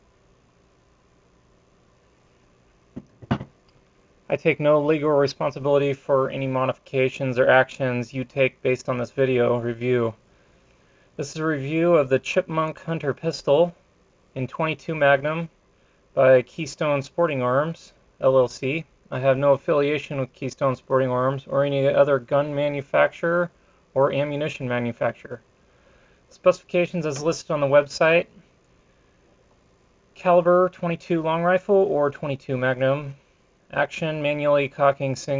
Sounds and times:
Speech: 0:04.3 - 0:10.2, 0:11.2 - 0:13.8, 0:14.4 - 0:15.6, 0:16.2 - 0:25.4, 0:26.3 - 0:28.4, 0:30.2 - 0:35.3.

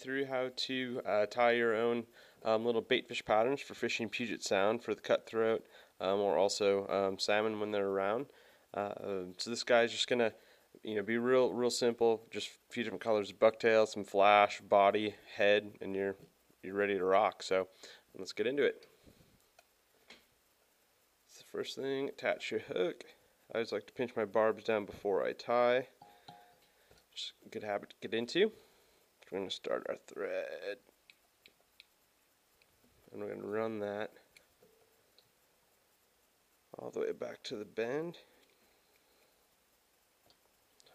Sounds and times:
Speech: 0:00.0 - 0:18.8, 0:21.3 - 0:26.0, 0:27.2 - 0:28.6, 0:29.2 - 0:30.9, 0:33.1 - 0:34.3, 0:36.8 - 0:38.3.

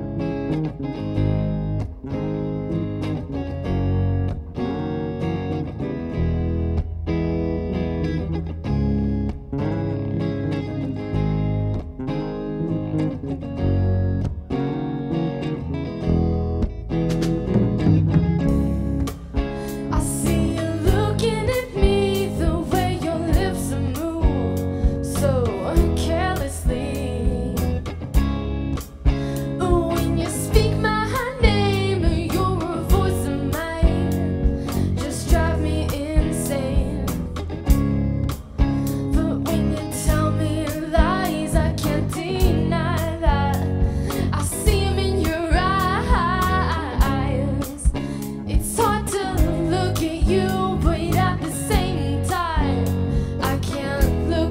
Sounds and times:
Bass guitar: 0:00.0 - 0:54.5.

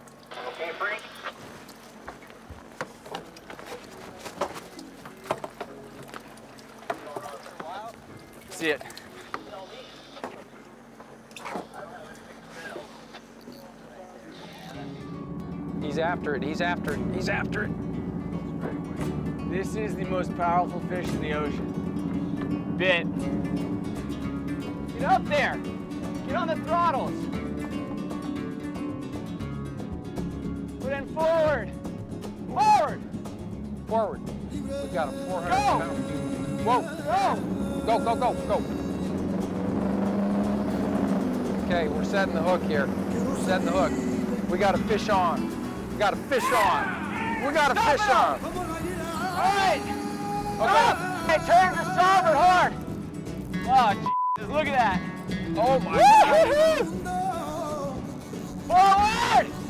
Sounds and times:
Music: 0:00.0 - 0:10.8, 0:13.0 - 0:59.6
Speech: 0:15.8 - 0:17.7, 0:19.5 - 0:21.6, 0:25.0 - 0:25.6, 0:34.9 - 0:36.0, 0:41.7 - 0:45.4, 0:46.0 - 0:48.5, 0:49.2 - 0:49.9, 0:50.6 - 0:52.8.

